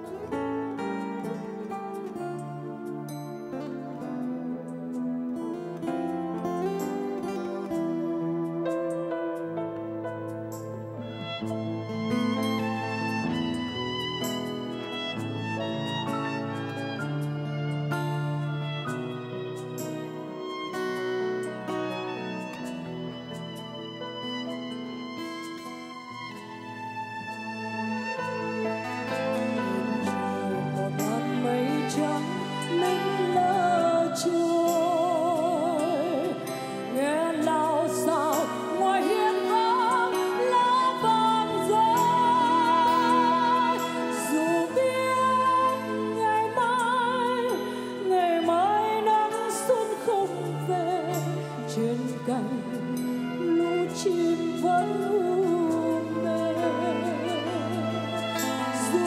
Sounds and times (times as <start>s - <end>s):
Tender music: 0.0s - 59.0s.